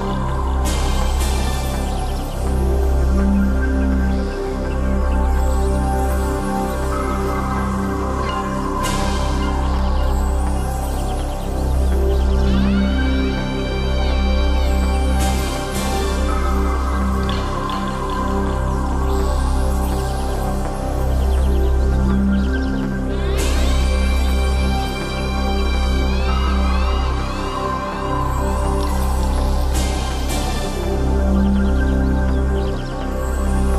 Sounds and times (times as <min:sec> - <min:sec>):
Music: 0:00.0 - 0:33.7.